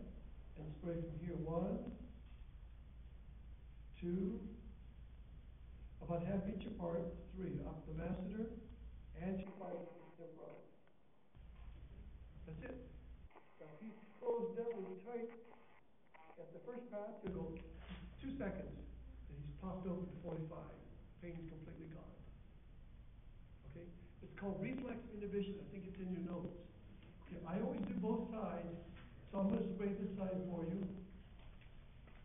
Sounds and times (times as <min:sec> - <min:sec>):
Speech: 0:00.0 - 0:02.1, 0:04.0 - 0:04.6, 0:06.0 - 0:10.7, 0:12.4 - 0:12.9, 0:13.6 - 0:15.5, 0:16.3 - 0:22.3, 0:23.6 - 0:31.1.